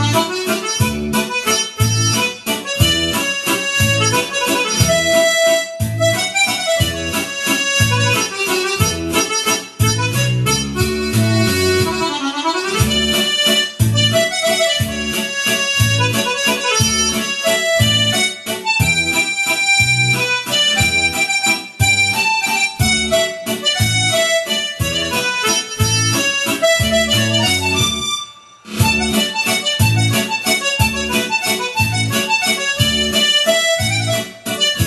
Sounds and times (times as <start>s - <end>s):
Music: 0.0s - 34.8s.